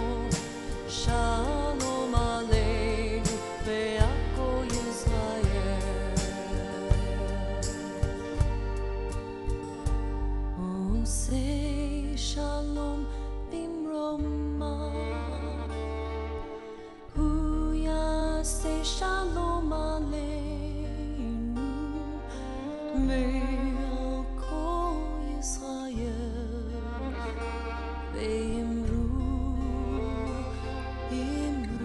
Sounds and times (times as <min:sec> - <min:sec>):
Christmas music: 0:00.0 - 0:13.4, 0:26.8 - 0:31.8.